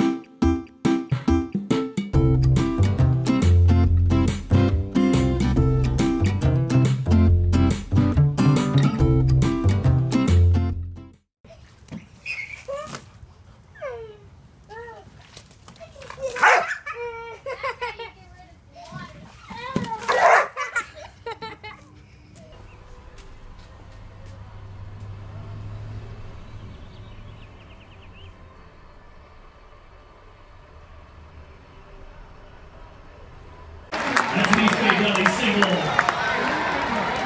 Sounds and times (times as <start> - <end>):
Music: 0.0 - 11.2
Bow-wow: 16.4 - 16.9, 20.1 - 20.7
Yip: 16.4 - 17.0, 20.1 - 20.8.